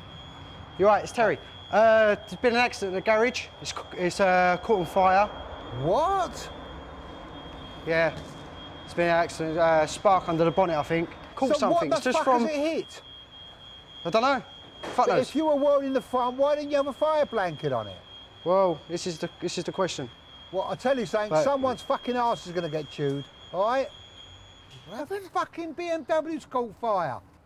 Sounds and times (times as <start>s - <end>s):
Speech: 0.8s - 6.5s, 7.9s - 8.2s, 8.9s - 13.0s, 14.1s - 14.4s, 15.0s - 23.9s, 24.9s - 27.2s.